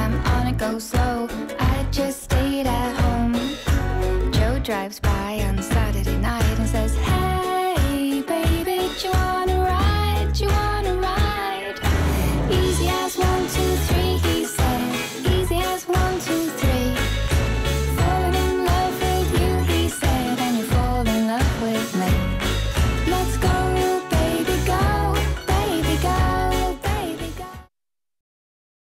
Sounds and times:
Soundtrack music: 0:06.7 - 0:27.5.

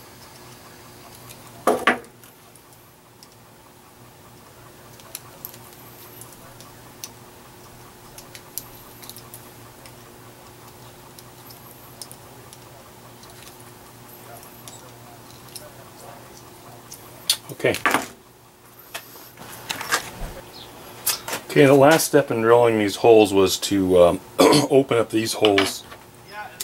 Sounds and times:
Speech: 0:14.2 - 0:17.9, 0:21.5 - 0:26.6.

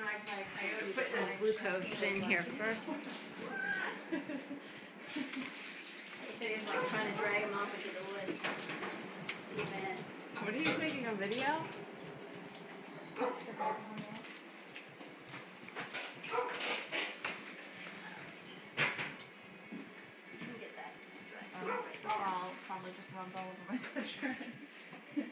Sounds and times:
Yip: 0:16.3 - 0:16.6.

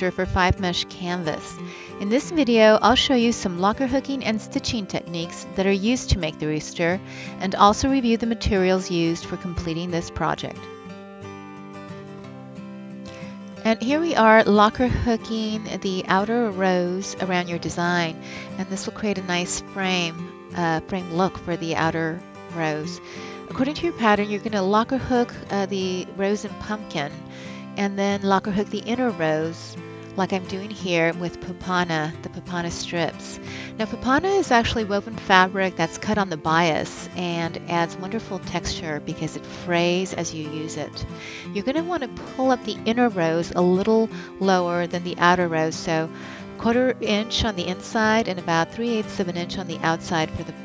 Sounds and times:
Speech: 0:00.0 - 0:10.7, 0:13.7 - 0:27.2, 0:27.8 - 0:50.6
Music: 0:00.0 - 0:50.6.

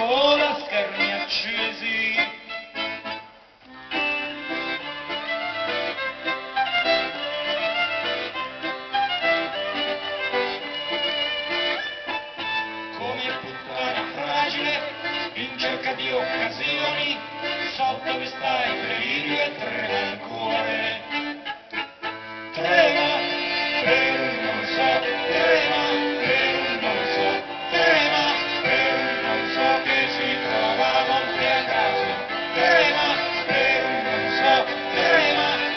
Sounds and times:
Music: 0:00.0 - 0:35.7.

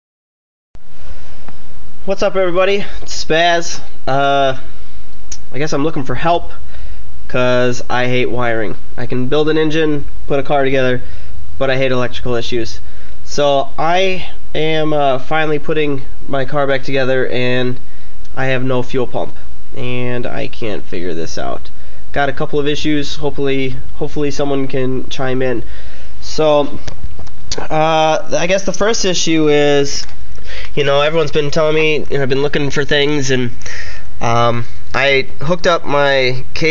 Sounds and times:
Speech: 0:02.1 - 0:04.7, 0:05.4 - 0:06.6, 0:07.3 - 0:11.0, 0:11.6 - 0:17.8, 0:18.4 - 0:26.8, 0:27.5 - 0:30.1, 0:30.7 - 0:33.6, 0:34.2 - 0:36.7.

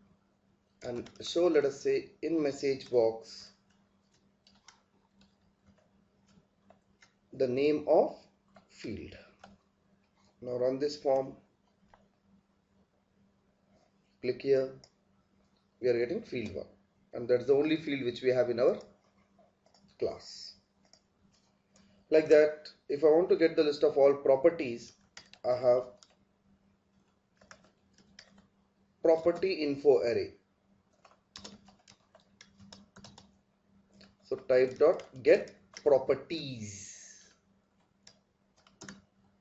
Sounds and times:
Inside, small room: 0:00.0 - 0:39.4
Speech: 0:00.8 - 0:03.6, 0:07.4 - 0:09.3, 0:10.4 - 0:11.4, 0:14.2 - 0:14.8, 0:15.8 - 0:18.9, 0:20.0 - 0:20.6, 0:22.1 - 0:26.0, 0:29.1 - 0:30.4, 0:34.3 - 0:37.4
Clicking: 0:03.6 - 0:07.2, 0:20.8 - 0:21.9, 0:25.1 - 0:26.2.

